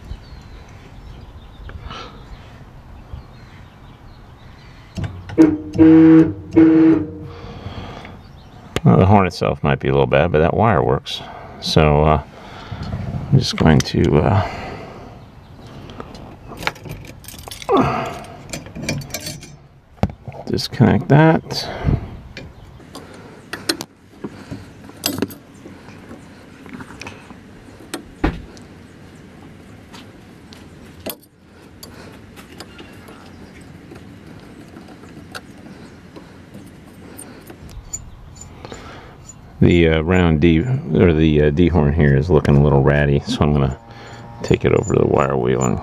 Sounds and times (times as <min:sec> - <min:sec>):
Speech: 0:08.8 - 0:12.3, 0:13.3 - 0:14.5, 0:20.5 - 0:21.8, 0:39.6 - 0:43.8, 0:44.4 - 0:45.8.